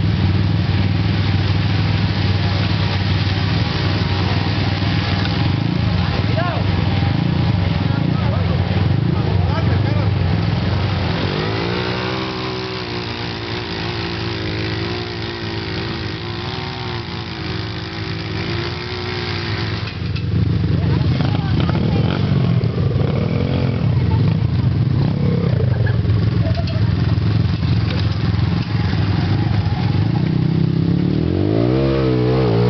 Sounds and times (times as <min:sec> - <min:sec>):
Speech: 0:06.0 - 0:06.8, 0:07.6 - 0:10.2, 0:20.7 - 0:22.6.